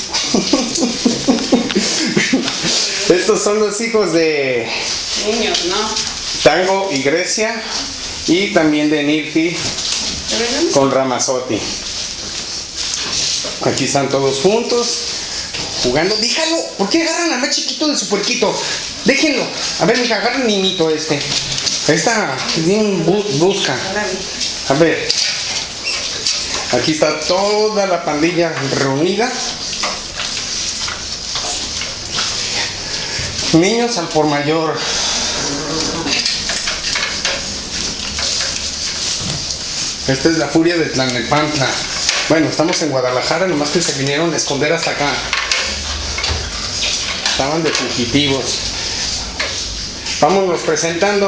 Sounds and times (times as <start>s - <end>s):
Speech: 15.8s - 25.2s, 47.3s - 48.6s, 50.2s - 51.2s.